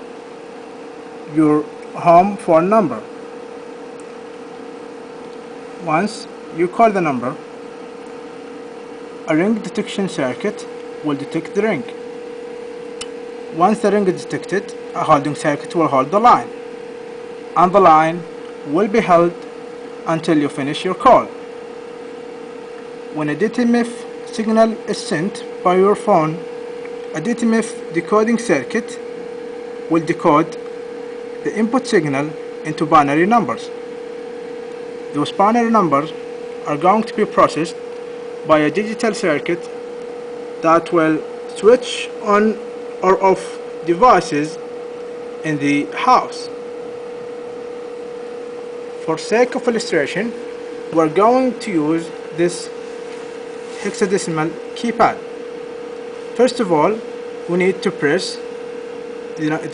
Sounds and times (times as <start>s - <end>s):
Speech: 1.3s - 3.1s, 5.8s - 7.4s, 9.3s - 12.0s, 13.5s - 16.6s, 17.6s - 21.4s, 23.1s - 26.5s, 27.2s - 29.1s, 29.9s - 30.6s, 31.4s - 33.8s, 35.1s - 37.8s, 38.4s - 39.7s, 40.6s - 44.6s, 45.4s - 46.6s, 49.0s - 52.8s, 53.8s - 55.3s, 56.4s - 58.5s, 59.4s - 59.7s.